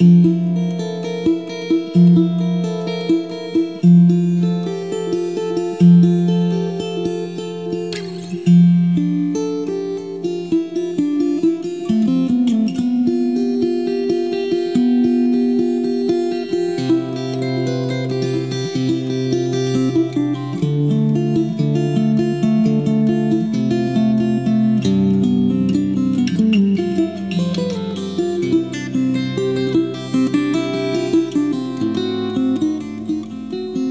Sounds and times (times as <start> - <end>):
Acoustic guitar: 0.0 - 33.9.